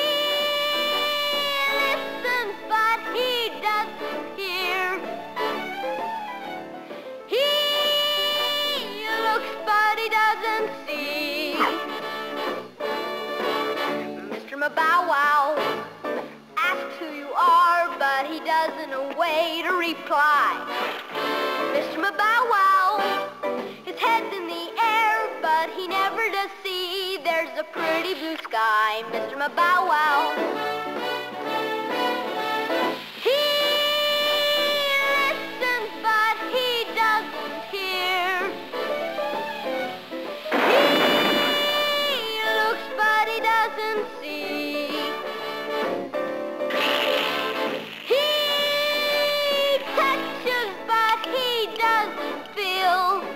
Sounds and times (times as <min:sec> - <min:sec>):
Music: 0:00.0 - 0:53.3.